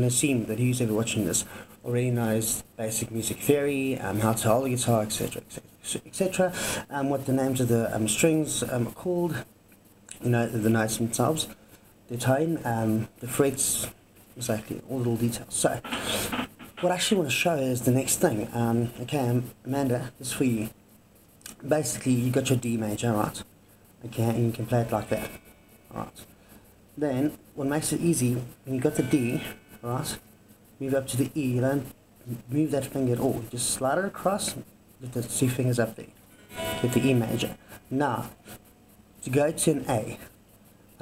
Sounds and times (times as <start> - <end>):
Speech: 0.0 - 9.5, 10.1 - 15.9, 16.8 - 20.8, 21.5 - 26.3, 27.0 - 30.2, 30.8 - 36.2, 36.8 - 38.4, 39.2 - 40.3.